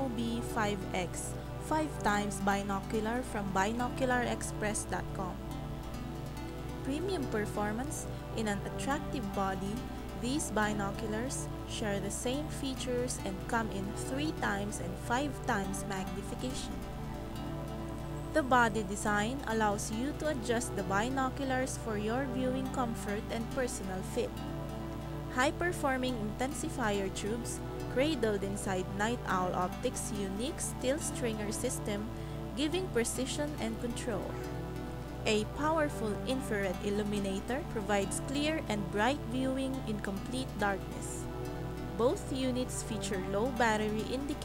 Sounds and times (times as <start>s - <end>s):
Speech: 0.0s - 5.4s, 6.9s - 16.8s, 18.4s - 24.3s, 25.3s - 34.4s, 35.3s - 41.2s, 42.0s - 44.4s
Music: 0.0s - 44.4s.